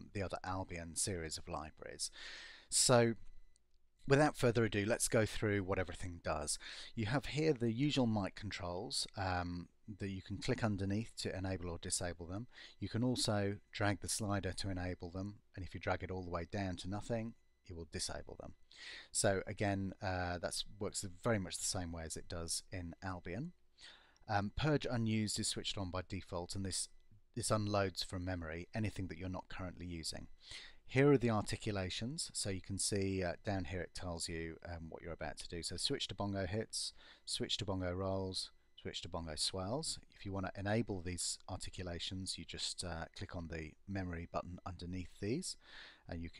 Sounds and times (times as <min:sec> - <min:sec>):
Speech: 0:00.0 - 0:03.3, 0:04.0 - 0:23.6, 0:24.3 - 0:46.3.